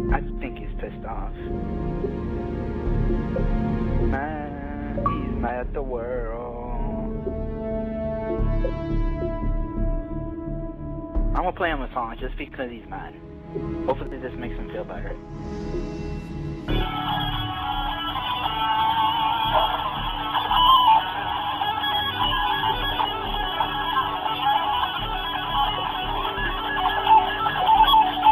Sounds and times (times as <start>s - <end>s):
Speech: 0.0s - 1.5s, 4.1s - 7.1s, 11.4s - 13.2s, 13.9s - 15.2s
Music: 0.0s - 28.3s.